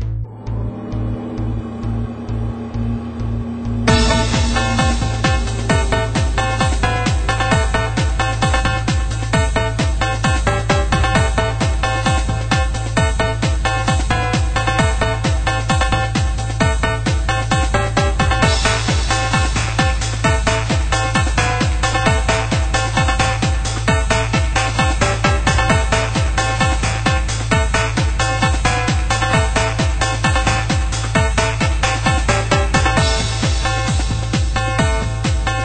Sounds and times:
Techno: 0.0 - 35.6.

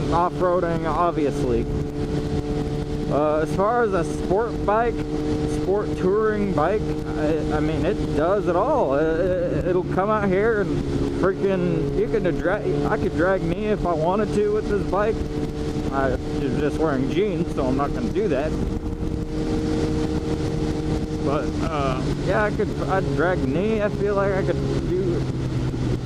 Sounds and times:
Speech: 0.0 - 1.6, 3.1 - 15.2, 15.9 - 18.6, 21.2 - 25.2.

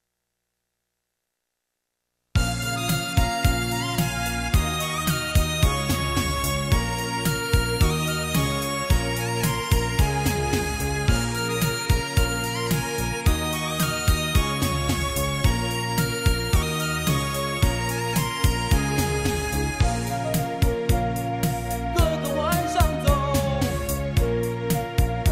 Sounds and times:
Music: 2.4 - 25.3.

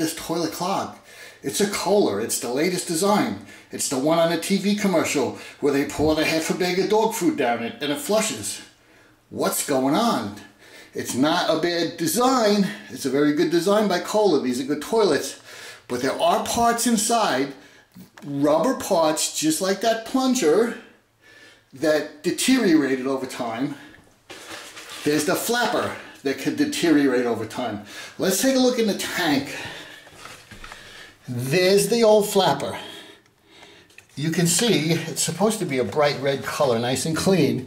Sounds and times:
Speech: 0.0 - 21.0, 21.8 - 23.9, 25.0 - 29.8, 31.2 - 33.1, 34.1 - 37.6.

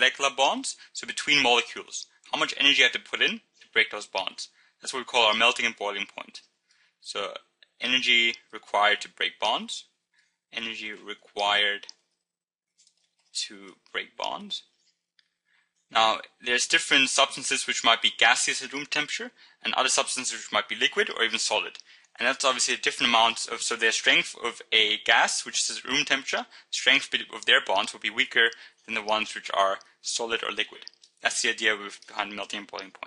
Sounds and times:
Speech: 0.0 - 9.9, 10.6 - 12.0, 13.4 - 14.7, 16.0 - 33.0.

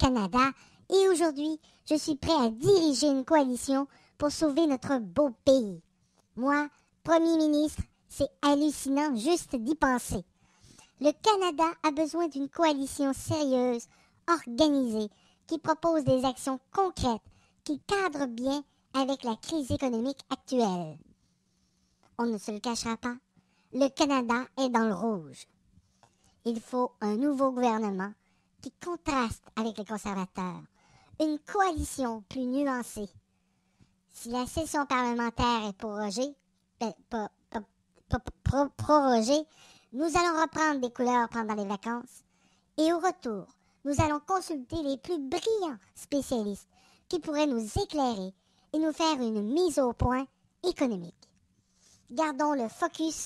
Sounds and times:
Speech: 0.0 - 5.8, 6.4 - 10.3, 11.0 - 21.0, 22.2 - 23.2, 23.8 - 25.5, 26.4 - 33.2, 34.2 - 42.2, 42.8 - 51.2, 52.1 - 53.2.

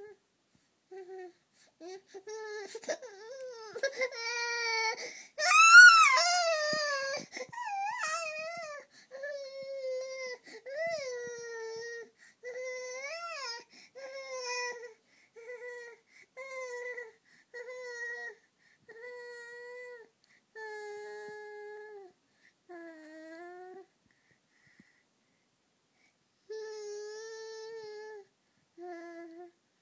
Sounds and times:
Baby cry, infant cry: 1.0 - 22.1.

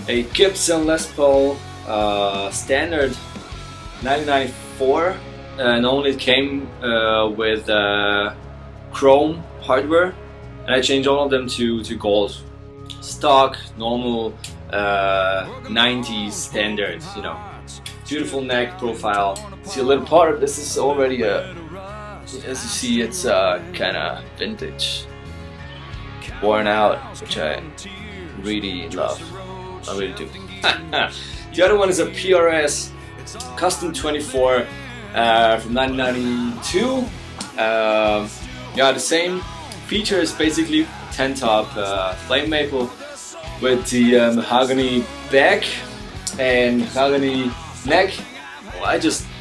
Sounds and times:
Speech: 0.0 - 3.2, 4.0 - 8.4, 9.0 - 21.7, 22.3 - 25.1, 26.2 - 49.3
Music: 0.0 - 49.4.

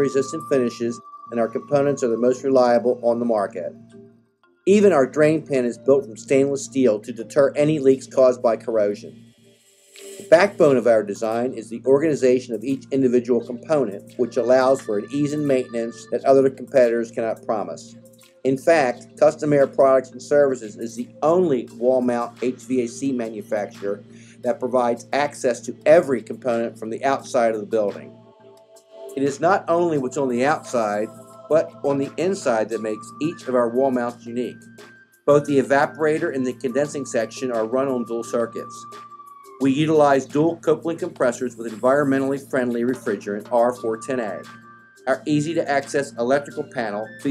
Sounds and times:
Speech: 0.0 - 3.7, 4.7 - 9.1, 10.2 - 28.1, 29.2 - 34.6, 35.3 - 38.9, 39.6 - 44.5, 45.1 - 47.3.

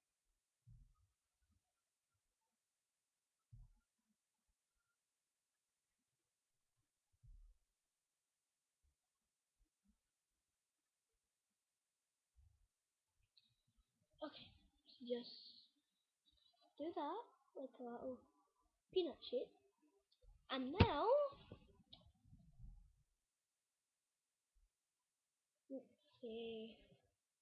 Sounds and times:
Speech: 14.2 - 15.7, 16.8 - 18.2, 19.0 - 19.6, 20.5 - 21.4, 25.7 - 26.9.

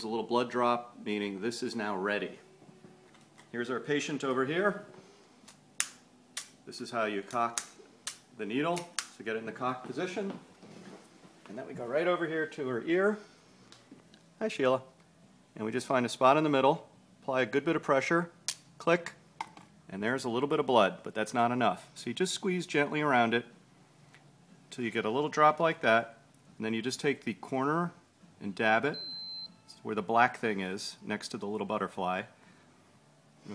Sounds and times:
Speech: 0.0 - 2.4, 3.5 - 4.9, 6.7 - 7.6, 8.4 - 10.4, 11.5 - 13.2, 14.4 - 14.9, 15.6 - 19.2, 19.9 - 23.5, 24.7 - 29.0, 29.7 - 32.3.

